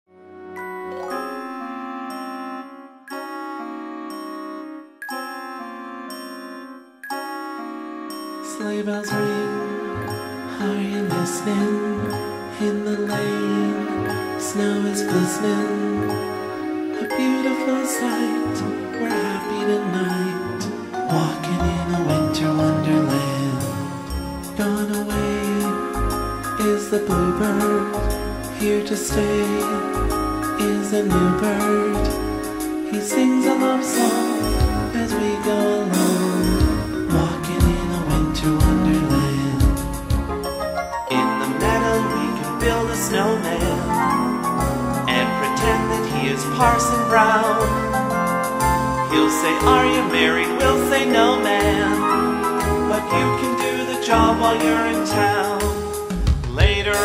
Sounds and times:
Glockenspiel: 0:00.4 - 0:57.0
Marimba, xylophone: 0:00.6 - 0:57.0.

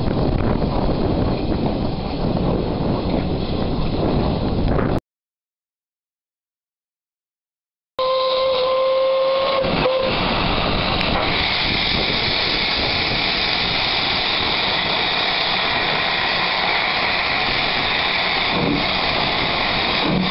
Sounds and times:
Steam whistle: 0:08.0 - 0:10.3
Hiss: 0:08.3 - 0:20.3.

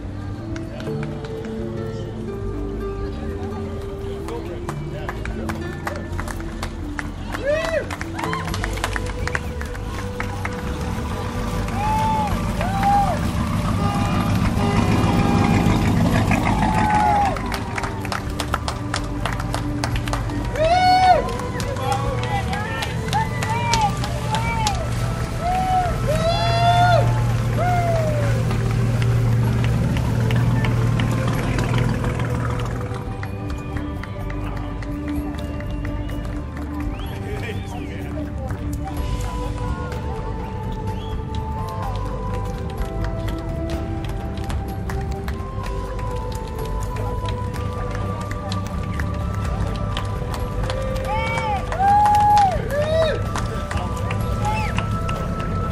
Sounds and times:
Music: 0:00.0 - 0:55.7
Motorboat, speedboat: 0:08.6 - 0:20.6, 0:21.3 - 0:35.2, 0:53.3 - 0:55.7.

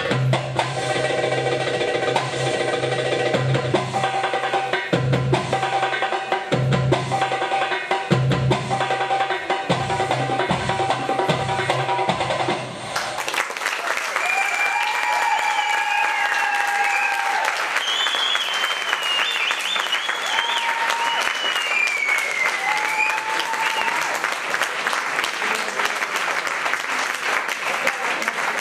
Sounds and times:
Applause: 0:12.9 - 0:28.6.

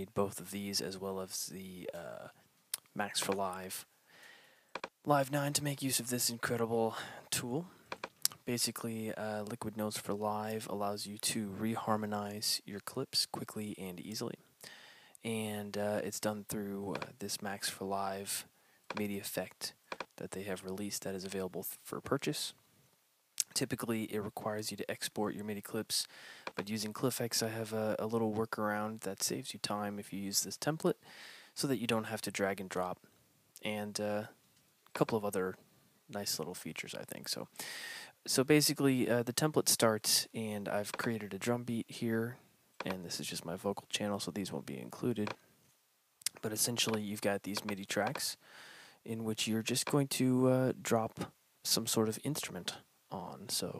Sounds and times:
Speech: 0:00.0 - 0:03.9, 0:05.0 - 0:07.7, 0:08.3 - 0:14.5, 0:15.2 - 0:22.6, 0:23.4 - 0:31.0, 0:31.6 - 0:33.0, 0:33.6 - 0:37.5, 0:38.2 - 0:45.4, 0:46.3 - 0:48.4, 0:49.0 - 0:53.7.

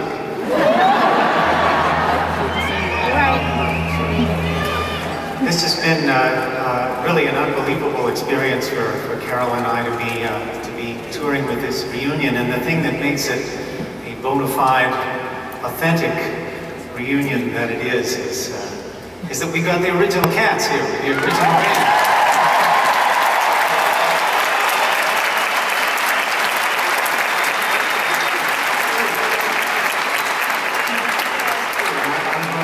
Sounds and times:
Speech: 0:02.6 - 0:21.6, 0:31.8 - 0:32.6.

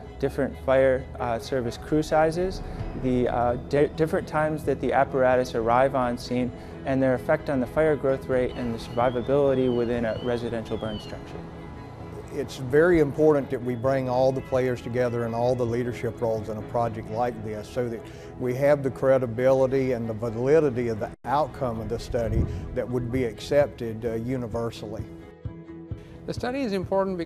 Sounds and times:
Music: 0:00.0 - 0:27.2
Speech: 0:00.2 - 0:11.2, 0:12.3 - 0:25.1, 0:26.3 - 0:27.2.

